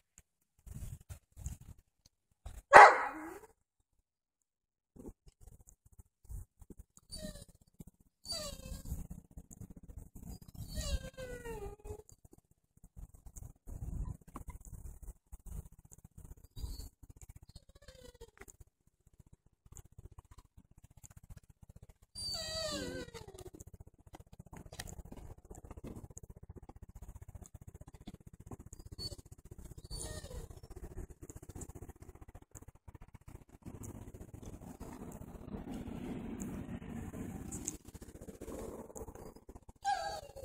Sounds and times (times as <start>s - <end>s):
Outside, rural or natural: 0.0s - 40.4s
Dog: 2.5s - 3.6s, 5.0s - 12.4s, 13.0s - 18.6s, 19.7s - 40.4s.